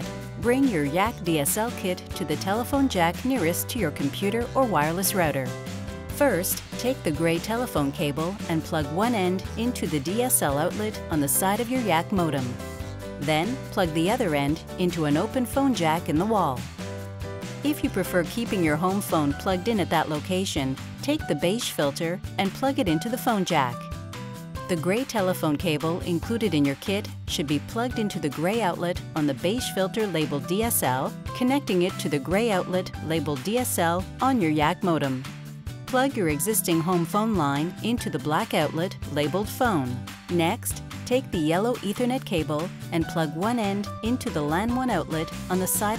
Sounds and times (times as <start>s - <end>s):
Speech: 0.0s - 5.5s, 6.2s - 12.6s, 13.2s - 16.6s, 17.7s - 23.8s, 24.7s - 35.2s, 35.9s - 45.9s
Music: 0.0s - 45.9s.